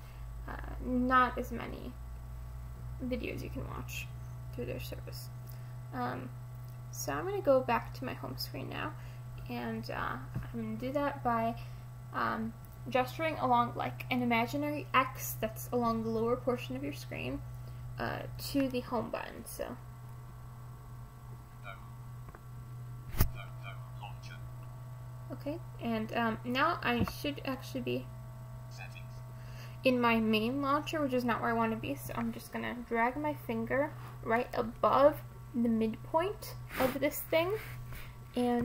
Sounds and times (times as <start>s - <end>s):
Speech: 0.5s - 2.0s, 3.0s - 5.3s, 6.0s - 6.3s, 7.0s - 11.6s, 12.2s - 17.4s, 18.0s - 19.8s, 21.7s - 21.9s, 23.3s - 24.4s, 25.3s - 28.1s, 28.8s - 29.2s, 29.9s - 37.6s, 38.4s - 38.6s.